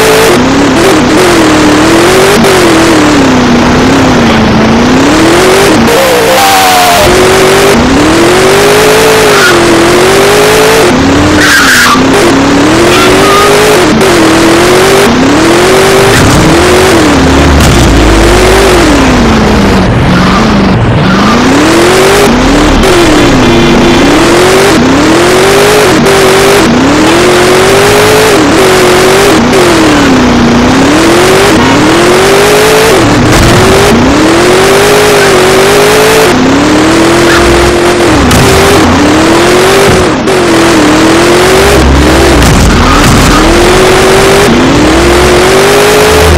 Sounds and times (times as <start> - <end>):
Car: 0.0 - 46.3.